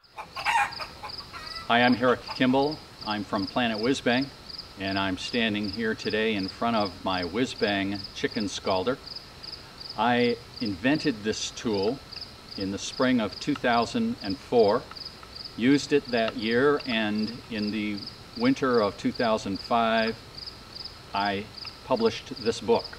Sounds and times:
Speech: 0:01.7 - 0:09.0, 0:10.0 - 0:12.0, 0:12.6 - 0:14.9, 0:15.6 - 0:20.2, 0:21.2 - 0:22.9.

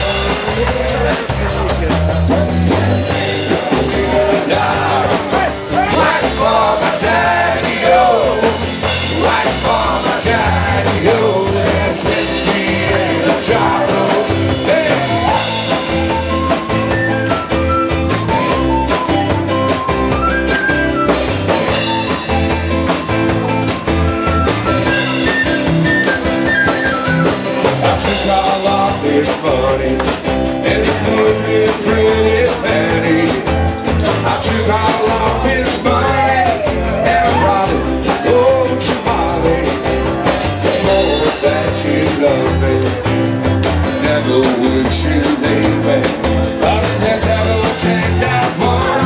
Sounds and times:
Music: 0:00.0 - 0:49.0.

